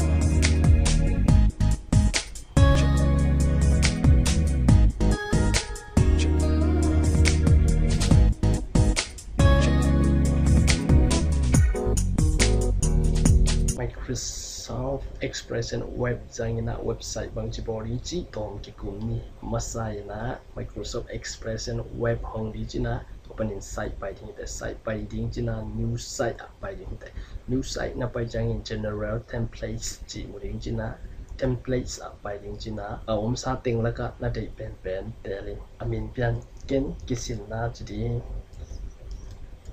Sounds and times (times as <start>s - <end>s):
Speech: 13.8s - 38.4s.